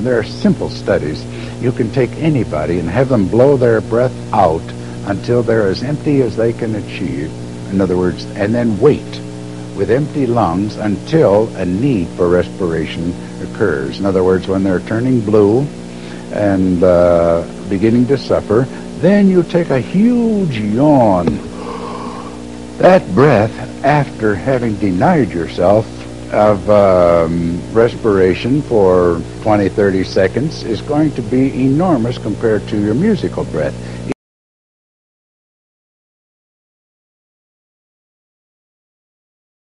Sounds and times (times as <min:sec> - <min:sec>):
Speech: 0:00.0 - 0:21.4, 0:22.8 - 0:34.2.